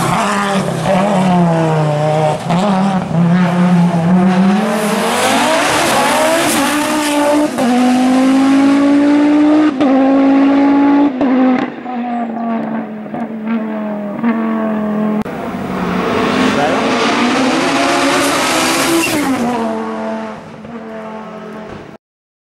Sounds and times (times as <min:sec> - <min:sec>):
Speech: 0:16.5 - 0:16.9.